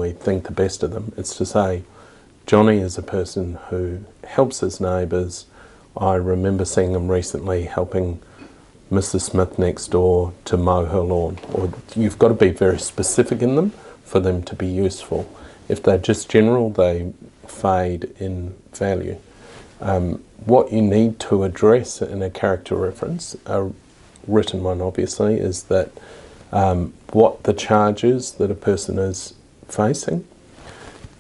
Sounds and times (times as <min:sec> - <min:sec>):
Speech: 0:00.0 - 0:01.9, 0:02.5 - 0:08.3, 0:08.9 - 0:19.2, 0:19.8 - 0:30.3.